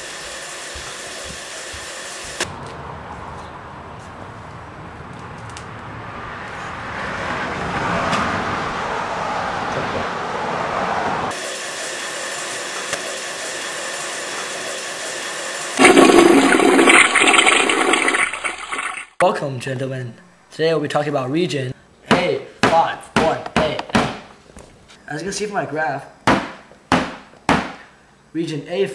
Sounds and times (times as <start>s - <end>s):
Gurgling: 15.8s - 19.2s.